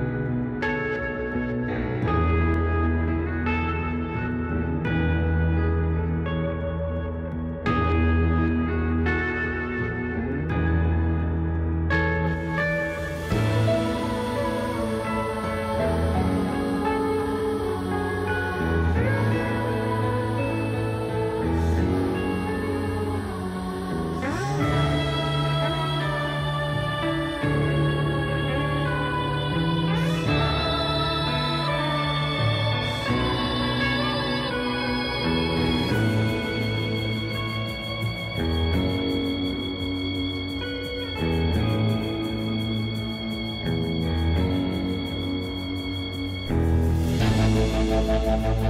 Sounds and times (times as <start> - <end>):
Music: 0.0 - 48.6.